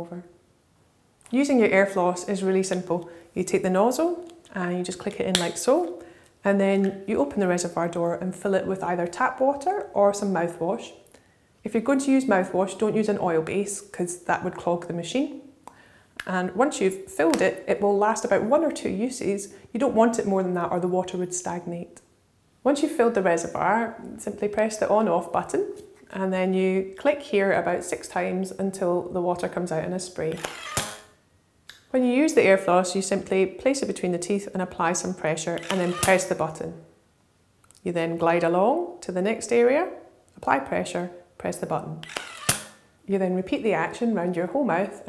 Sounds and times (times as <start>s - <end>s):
Speech: 0.0s - 0.3s, 1.3s - 11.0s, 11.6s - 15.4s, 16.2s - 22.0s, 22.6s - 30.4s, 31.9s - 36.8s, 37.8s - 42.0s, 43.1s - 45.0s.